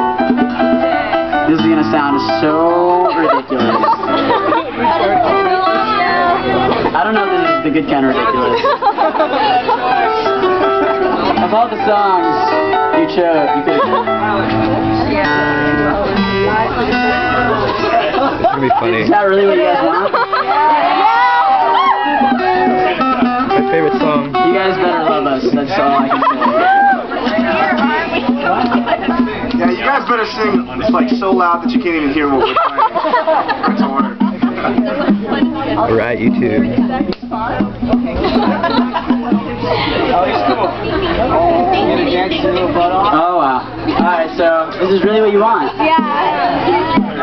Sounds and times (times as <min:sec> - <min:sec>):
Music: 0:00.0 - 0:47.2.